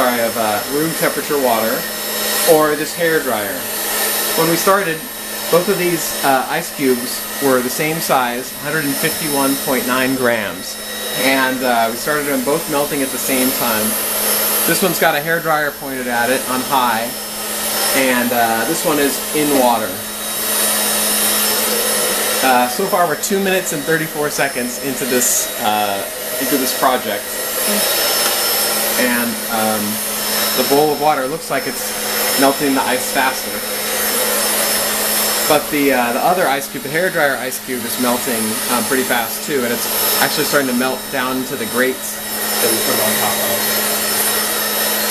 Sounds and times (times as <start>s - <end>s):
Hair dryer: 0.0s - 45.1s.